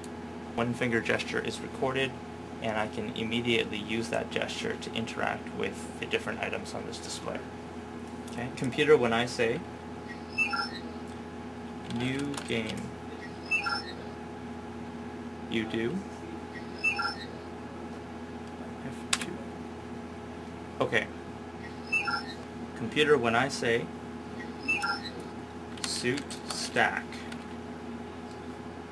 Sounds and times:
Male speech, man speaking: 0.6 - 7.5, 8.4 - 9.6, 11.9 - 12.9, 15.5 - 16.1, 20.8 - 21.1, 22.8 - 23.9, 25.9 - 27.2.

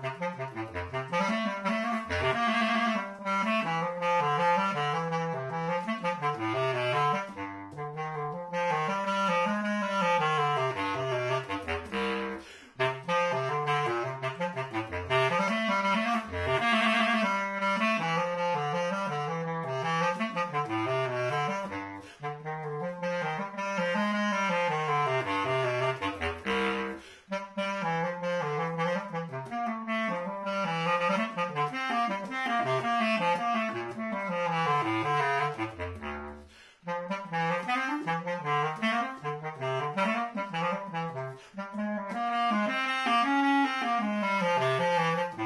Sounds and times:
Saxophone: 0.0 - 45.4.

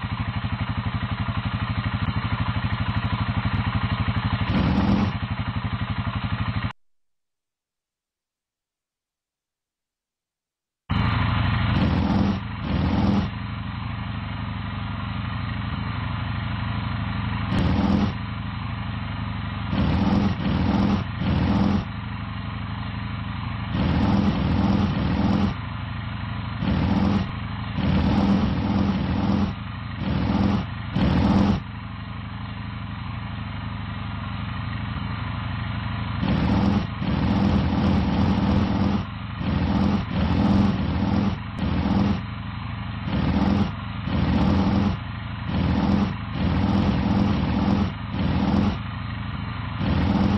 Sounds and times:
Motorcycle: 0.0 - 6.8, 10.9 - 50.3.

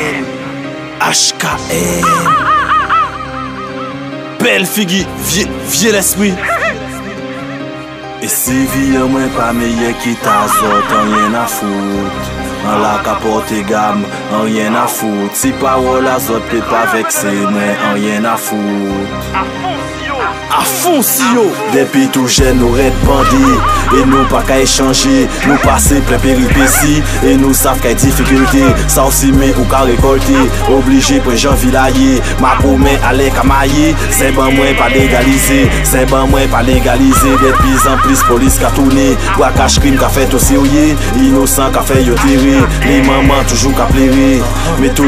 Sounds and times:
Music: 0.0 - 45.0.

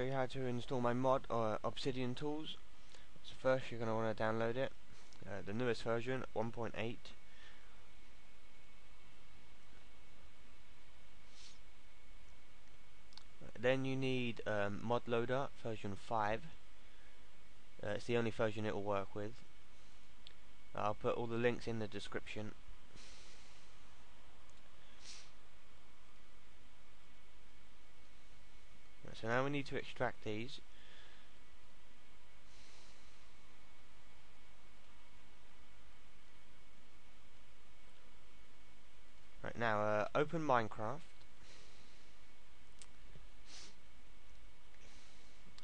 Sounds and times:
Speech: 0.0 - 2.6, 3.2 - 7.2, 13.4 - 16.6, 17.8 - 19.4, 20.8 - 22.6, 29.0 - 30.7, 39.4 - 41.1.

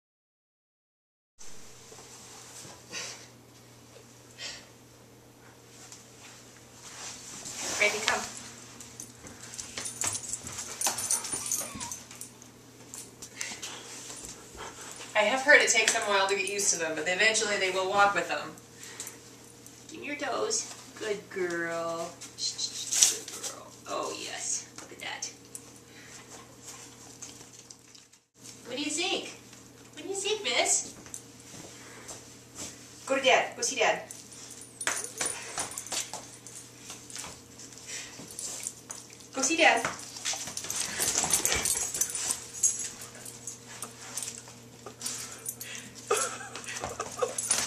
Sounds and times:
Speech: 7.7 - 8.3, 15.2 - 18.6, 19.9 - 25.4, 28.6 - 29.4, 30.0 - 30.9, 33.1 - 34.1, 39.4 - 39.9.

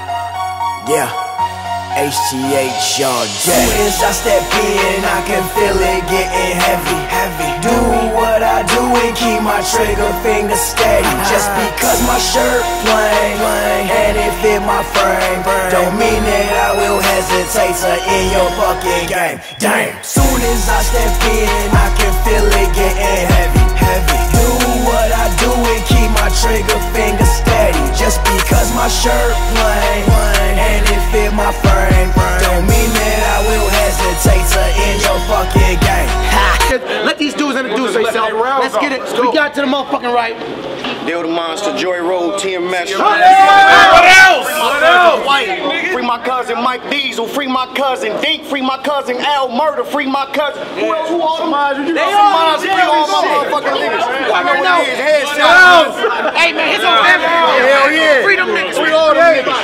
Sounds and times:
Music: 0.0 - 36.8.

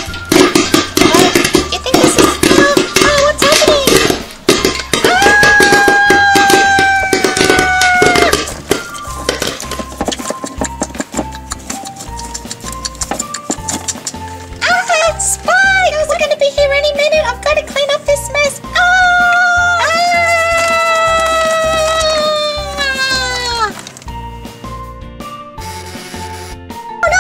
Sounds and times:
Music: 0.0 - 27.2
Speech: 1.7 - 4.0, 14.6 - 20.7.

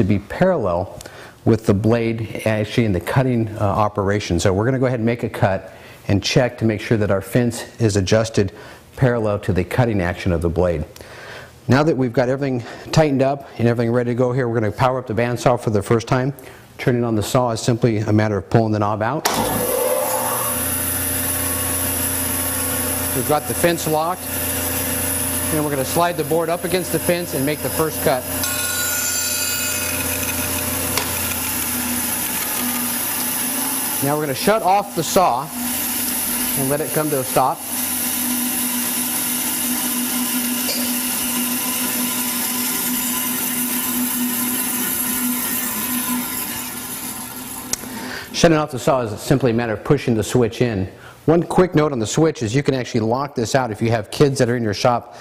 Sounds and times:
Speech: 0.0 - 10.9, 11.7 - 19.2, 23.2 - 24.2, 25.5 - 28.3, 34.0 - 35.6, 36.6 - 37.6, 48.4 - 55.1.

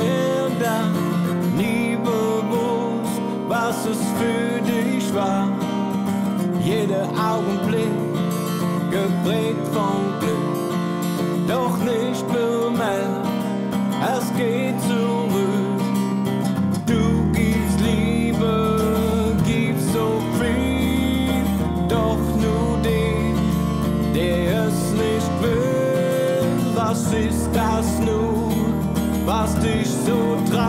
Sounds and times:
Acoustic guitar: 0.0 - 30.6
Strum: 3.5 - 30.6.

